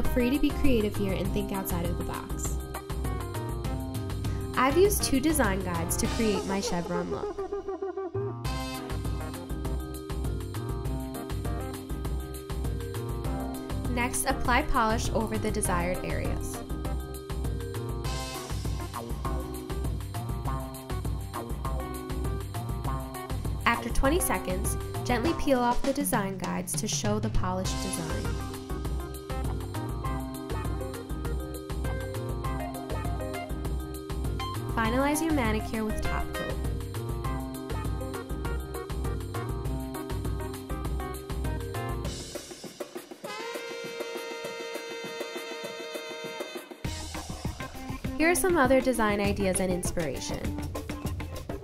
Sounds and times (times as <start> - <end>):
Speech: 0.0 - 2.6, 4.6 - 7.3, 13.9 - 16.6, 23.7 - 28.3, 34.8 - 36.4, 48.2 - 50.5
Music: 0.0 - 51.6.